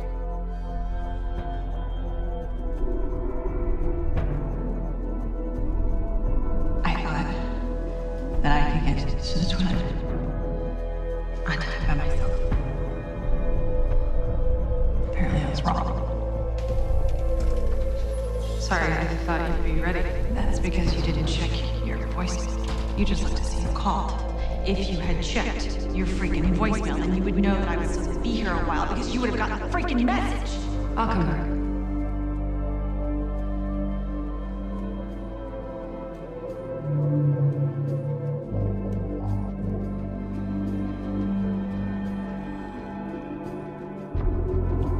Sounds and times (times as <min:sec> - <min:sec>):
Music: 0:00.0 - 0:44.9
Speech: 0:06.9 - 0:07.6, 0:08.4 - 0:10.0, 0:11.4 - 0:12.5, 0:15.1 - 0:16.0, 0:18.6 - 0:31.6.